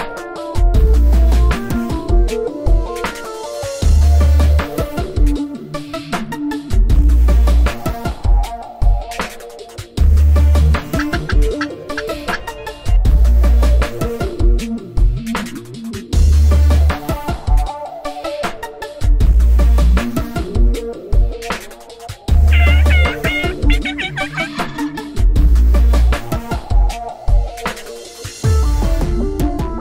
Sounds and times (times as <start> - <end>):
Music: 0.0 - 29.8.